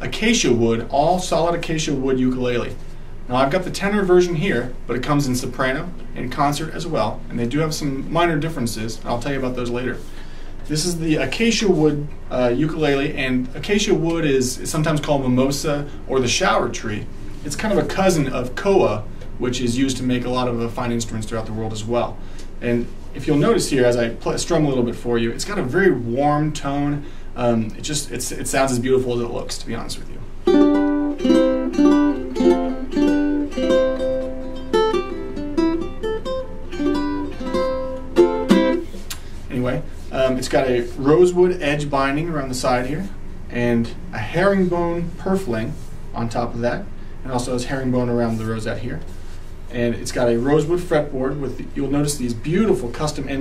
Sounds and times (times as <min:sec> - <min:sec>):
Speech: 0:00.0 - 0:10.1, 0:10.7 - 0:30.3, 0:39.5 - 0:49.1, 0:49.7 - 0:53.4
Music: 0:30.5 - 0:38.9.